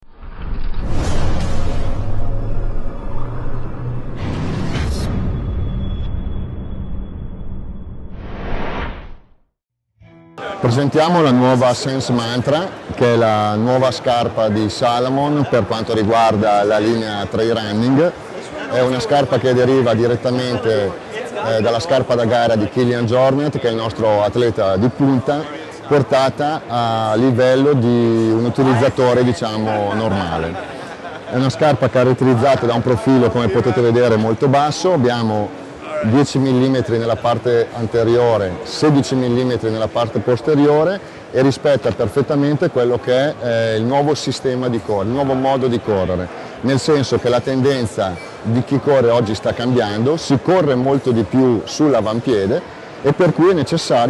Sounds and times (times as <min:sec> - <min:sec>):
Speech: 0:10.4 - 0:30.7, 0:31.3 - 0:54.1.